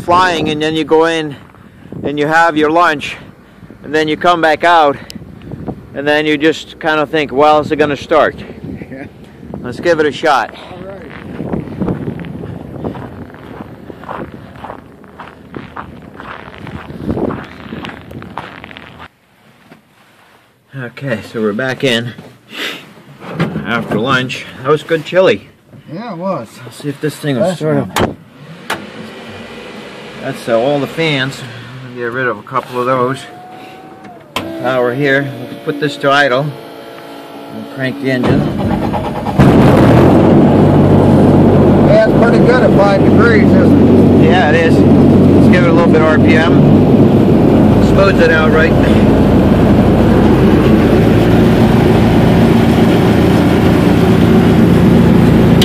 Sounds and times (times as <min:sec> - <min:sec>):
Vehicle: 0:00.0 - 0:55.6
Speech: 0:30.2 - 0:33.4, 0:34.6 - 0:36.6, 0:37.6 - 0:38.5, 0:45.4 - 0:46.6, 0:47.8 - 0:49.0.